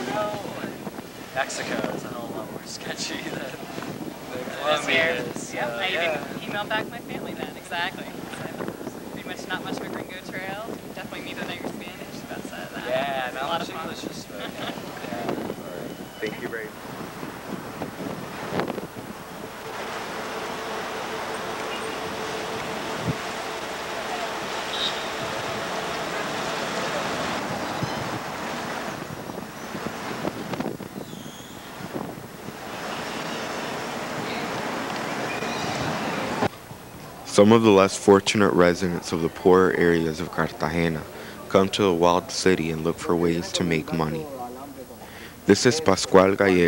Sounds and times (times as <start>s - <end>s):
Wind noise (microphone): 0.0s - 19.6s, 22.5s - 23.3s, 27.2s - 33.6s, 34.2s - 36.5s.